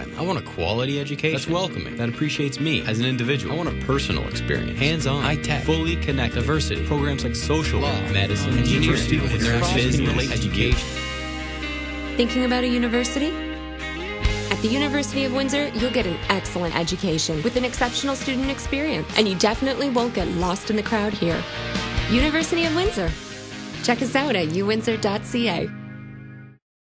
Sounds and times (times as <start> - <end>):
Speech: 0.0 - 10.9, 12.2 - 13.4, 14.5 - 21.4, 22.1 - 23.2, 23.9 - 25.7
Music: 0.0 - 26.6.